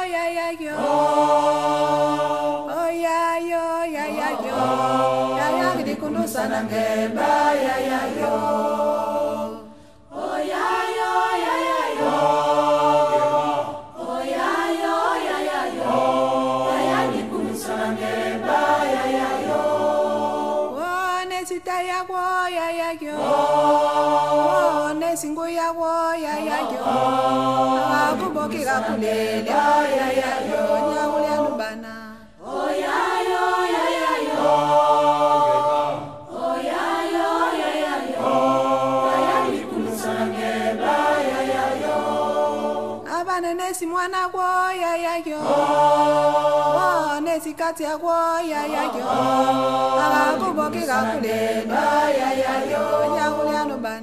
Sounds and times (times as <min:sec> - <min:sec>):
Mantra: 0:00.0 - 0:54.0.